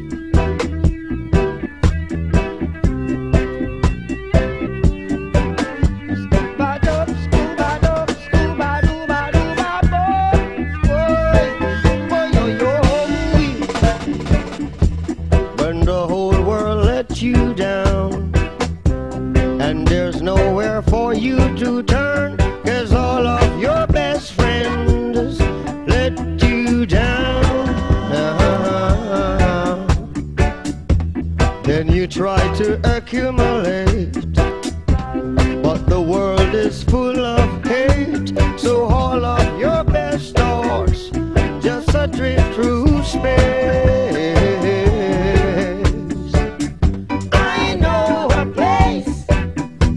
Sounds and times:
Funk: 0.0 - 49.9.

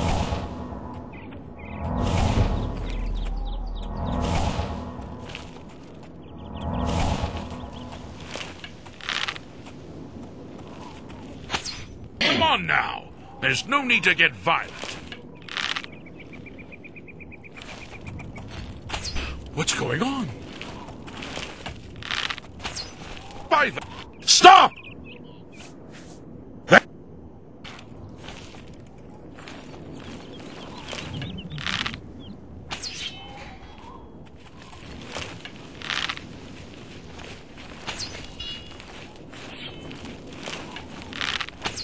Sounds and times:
Speech: 12.2 - 14.8, 19.6 - 20.4, 23.5 - 24.7.

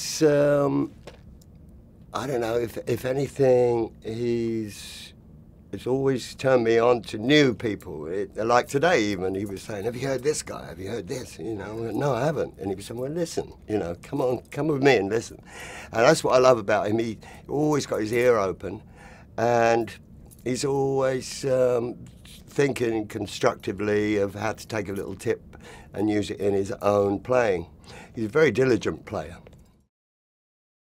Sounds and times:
Speech: 0.0 - 0.9, 2.2 - 18.8, 19.4 - 29.5.

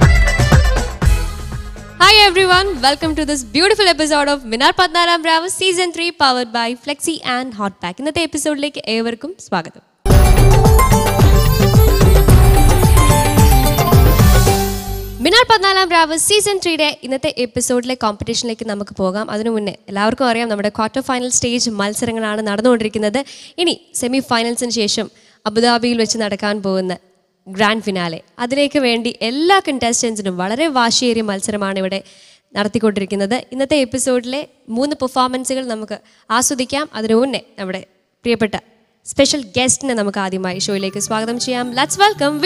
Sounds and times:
Music: 0.0 - 4.4, 10.1 - 16.1, 40.5 - 42.4
Speech: 2.0 - 9.8, 15.2 - 32.0, 32.6 - 42.4.

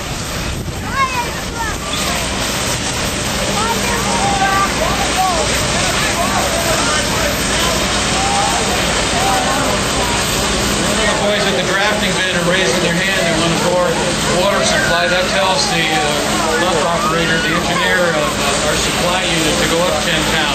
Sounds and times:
Speech: 3.4 - 20.5.

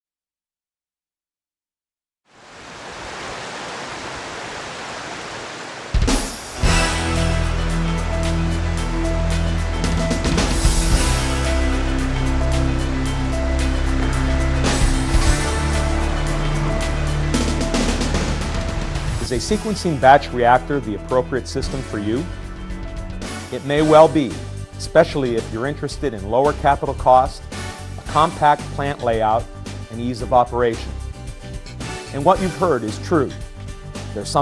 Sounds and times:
Outside, rural or natural: 2.2 - 19.2
Pink noise: 2.3 - 6.8
Music: 6.0 - 34.4.

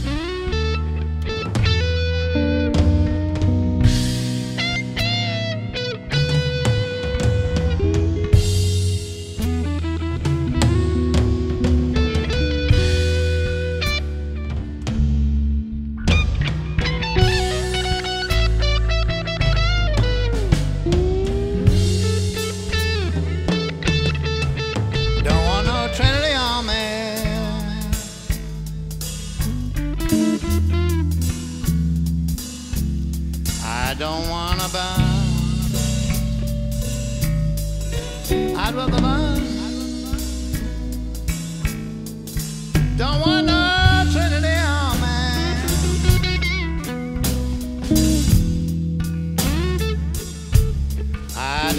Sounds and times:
Music: 0.0 - 51.7.

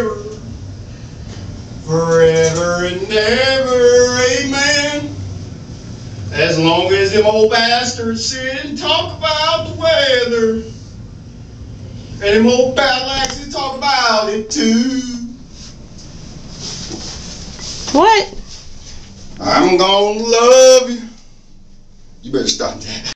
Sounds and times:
Male singing: 0.0 - 0.5, 1.9 - 5.2, 6.4 - 10.8, 12.2 - 15.4, 19.4 - 21.2
Speech: 17.9 - 18.4, 19.4 - 20.4, 22.3 - 23.1.

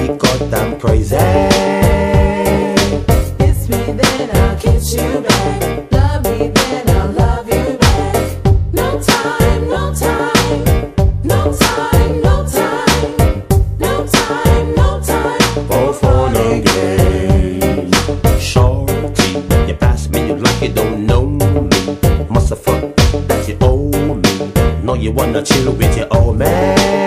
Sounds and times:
Music: 0.0 - 27.0.

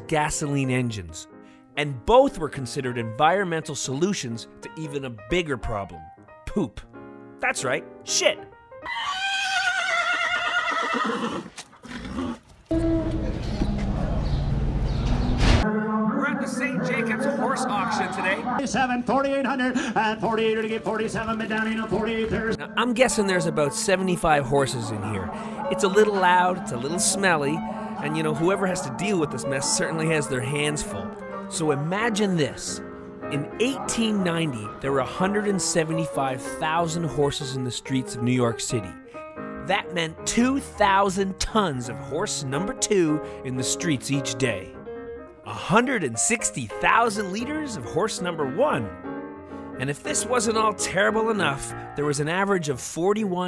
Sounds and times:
Music: 0.0 - 9.2, 12.7 - 53.4
Speech: 1.8 - 8.4, 16.0 - 39.0, 39.7 - 44.7, 45.5 - 48.9, 49.8 - 53.4
Neigh, whinny: 8.8 - 13.0.

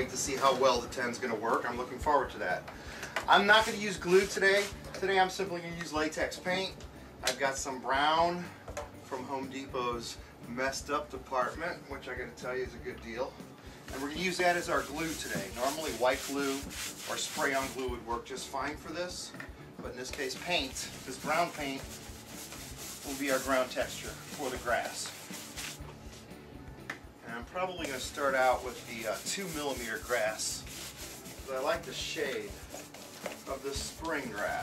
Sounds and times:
Speech: 0.0 - 2.6, 3.3 - 8.5, 9.1 - 21.8, 23.0 - 25.1, 27.2 - 30.6, 31.5 - 32.6, 33.5 - 34.6.

